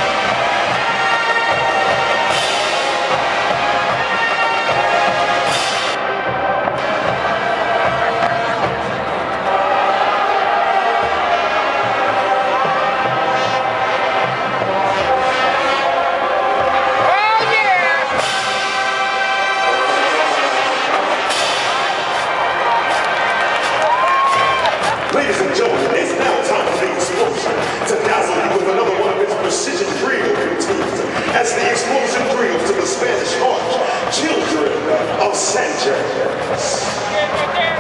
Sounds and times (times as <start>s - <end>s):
Music: 0.0s - 37.8s
Speech: 17.1s - 18.1s, 25.1s - 37.8s.